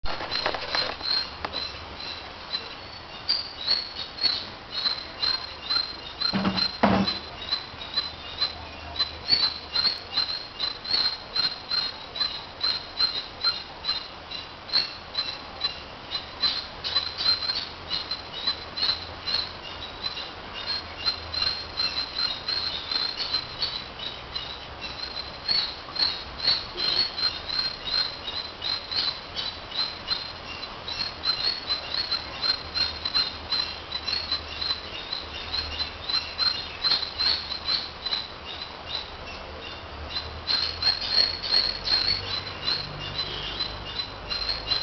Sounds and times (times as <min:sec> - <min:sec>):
Rustling leaves: 0:00.0 - 0:44.8
Bird: 0:00.1 - 0:44.8.